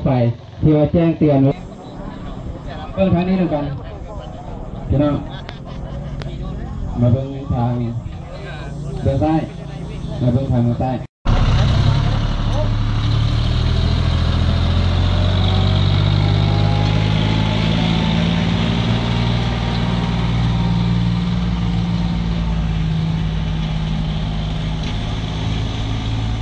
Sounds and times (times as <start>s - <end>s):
Motor vehicle (road): 0.0s - 26.4s
Outside, rural or natural: 0.0s - 26.4s.